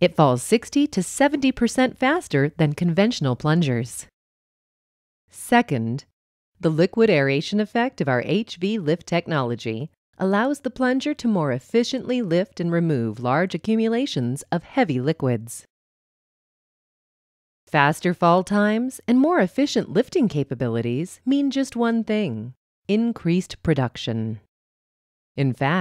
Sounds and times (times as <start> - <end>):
Speech: 0.0 - 4.1, 5.4 - 15.7, 17.7 - 24.5, 25.4 - 25.8.